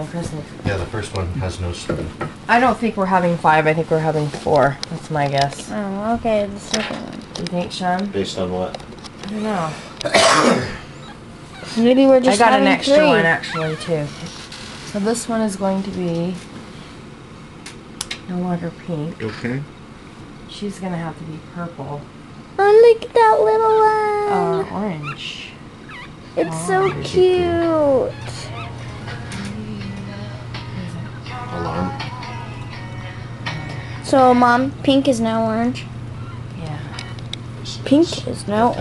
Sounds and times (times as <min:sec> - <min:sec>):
Dog: 0:25.9 - 0:26.1.